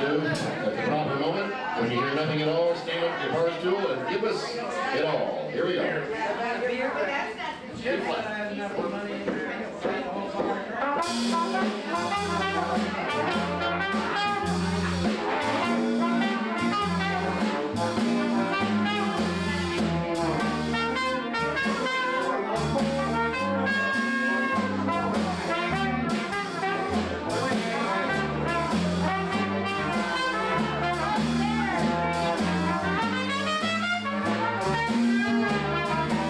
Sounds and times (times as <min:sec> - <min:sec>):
Speech: 0:00.0 - 0:36.3
Blues: 0:09.2 - 0:36.3.